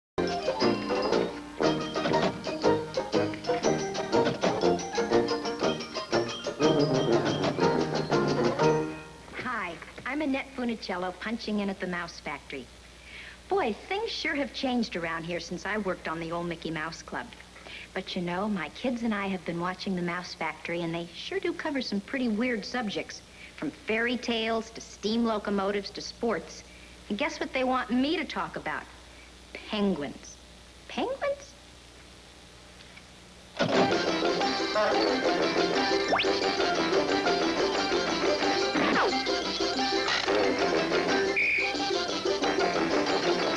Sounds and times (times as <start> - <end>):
Music: 0.2 - 9.4, 33.6 - 43.5
Speech: 9.4 - 12.7, 13.5 - 29.0, 29.6 - 31.6.